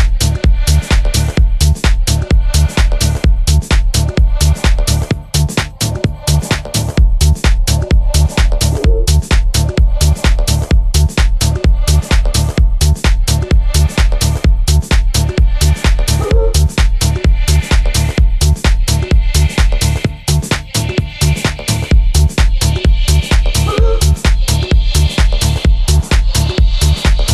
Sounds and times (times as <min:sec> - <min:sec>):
Exciting music: 0:00.0 - 0:27.3.